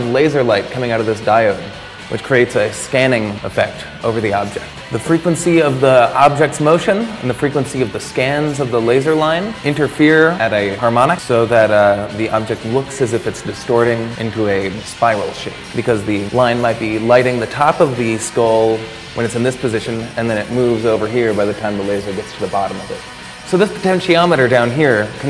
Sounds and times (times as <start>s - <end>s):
Music: 0.0s - 25.2s
Speech: 0.0s - 25.2s.